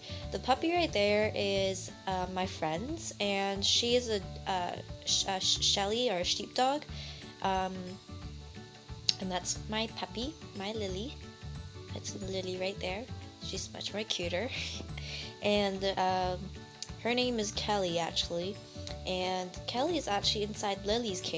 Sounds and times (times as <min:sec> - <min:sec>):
Music: 0:00.0 - 0:21.3
Speech: 0:00.4 - 0:08.0, 0:09.1 - 0:11.2, 0:11.9 - 0:14.8, 0:15.4 - 0:21.3.